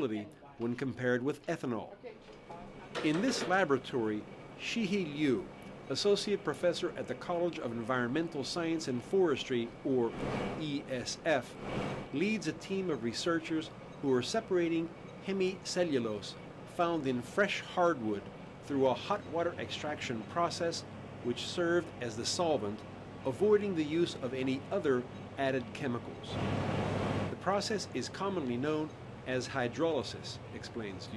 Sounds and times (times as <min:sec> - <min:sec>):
Speech: 0:00.0 - 0:11.5, 0:12.2 - 0:26.4, 0:27.4 - 0:31.1.